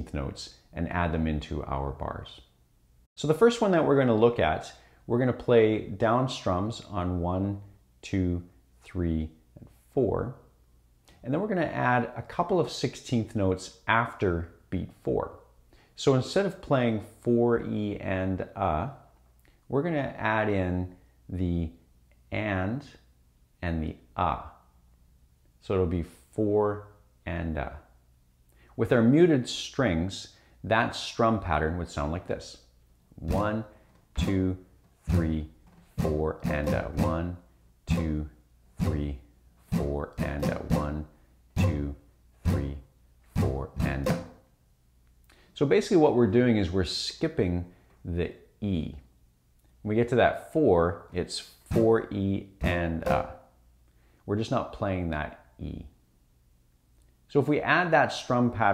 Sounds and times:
Speech: 0:00.0 - 0:02.5, 0:03.2 - 0:10.5, 0:11.2 - 0:19.1, 0:19.7 - 0:24.6, 0:25.6 - 0:27.9, 0:28.8 - 0:44.3, 0:45.6 - 0:49.1, 0:49.8 - 0:53.4, 0:54.3 - 0:56.0, 0:57.3 - 0:58.7
Acoustic guitar: 0:33.2 - 0:44.4, 0:52.6 - 0:53.4
Strum: 0:33.2 - 0:44.5, 0:51.6 - 0:53.5.

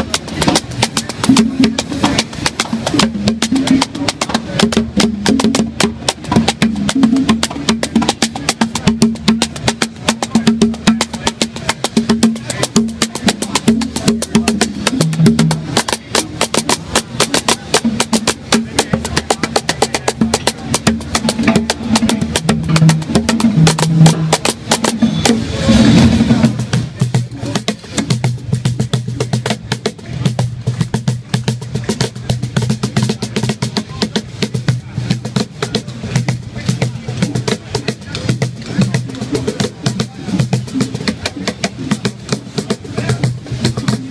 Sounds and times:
Percussion: 0:00.0 - 0:44.1.

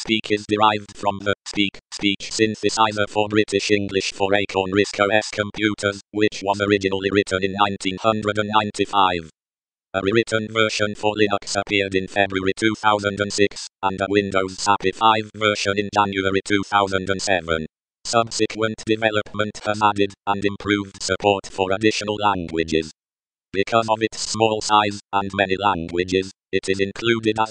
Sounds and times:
Speech synthesizer: 0:00.0 - 0:09.3, 0:10.0 - 0:23.0, 0:23.6 - 0:27.5.

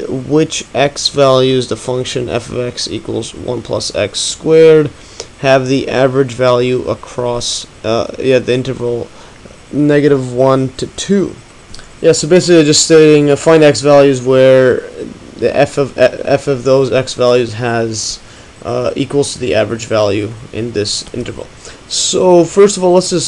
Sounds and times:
Speech: 0:00.0 - 0:09.1, 0:09.7 - 0:23.2.

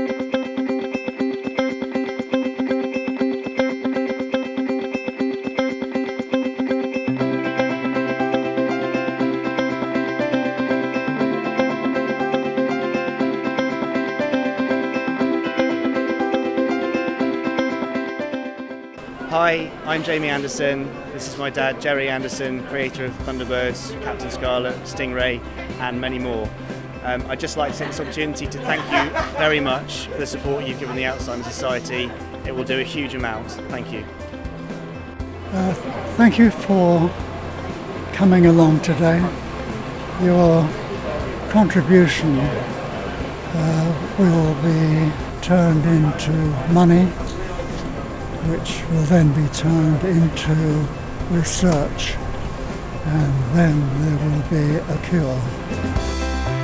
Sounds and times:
Music: 0:00.0 - 0:56.6
Speech: 0:19.3 - 0:34.0, 0:35.5 - 0:37.2, 0:38.1 - 0:39.3, 0:41.5 - 0:42.8, 0:43.5 - 0:52.2, 0:53.1 - 0:55.6.

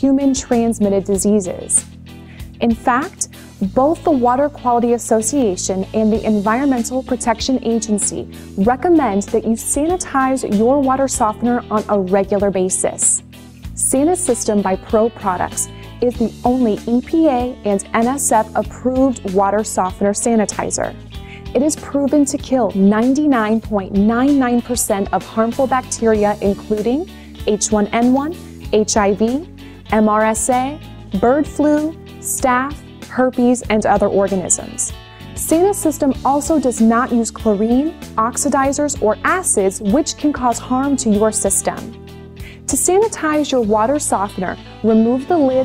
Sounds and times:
Speech: 0:00.0 - 0:01.8, 0:02.6 - 0:13.2, 0:13.8 - 0:41.9, 0:42.7 - 0:45.6
Music: 0:00.0 - 0:45.6.

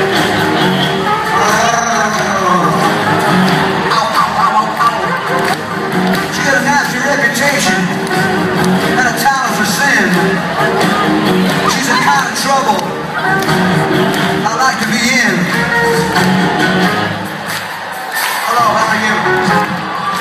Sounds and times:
Music: 0:00.0 - 0:20.2
Speech: 0:01.4 - 0:02.9, 0:06.3 - 0:07.9, 0:09.0 - 0:10.2, 0:11.7 - 0:12.9, 0:14.4 - 0:15.5, 0:18.5 - 0:19.4.

